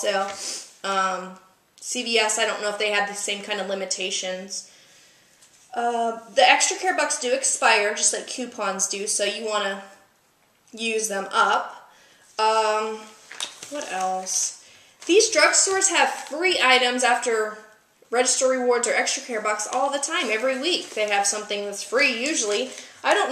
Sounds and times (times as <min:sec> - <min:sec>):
Speech: 0:00.0 - 0:04.7, 0:05.7 - 0:10.0, 0:10.8 - 0:11.8, 0:12.4 - 0:23.3
Inside, small room: 0:00.0 - 0:23.3.